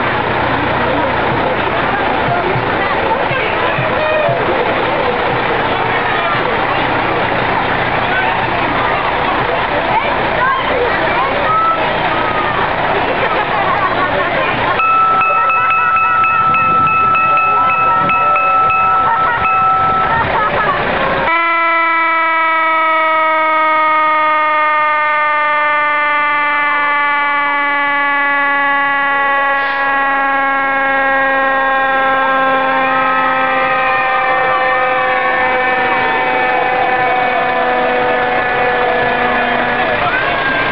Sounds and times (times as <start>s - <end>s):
Fire engine, fire truck (siren): 4.8s - 40.7s.